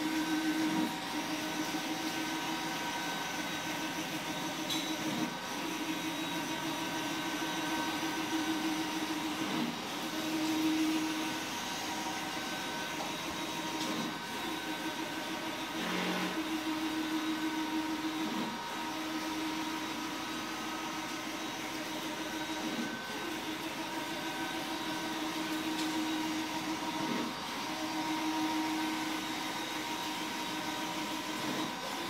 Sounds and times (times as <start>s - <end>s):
Printer: 0.0s - 32.0s.